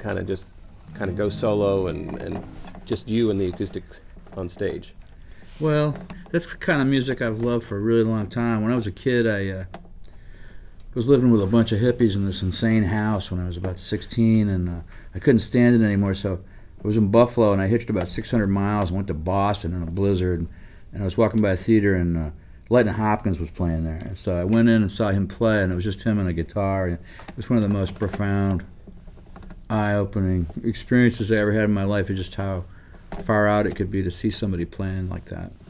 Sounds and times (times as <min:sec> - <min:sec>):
Speech: 0:00.0 - 0:05.0, 0:05.6 - 0:09.8, 0:10.9 - 0:28.8, 0:29.7 - 0:35.7.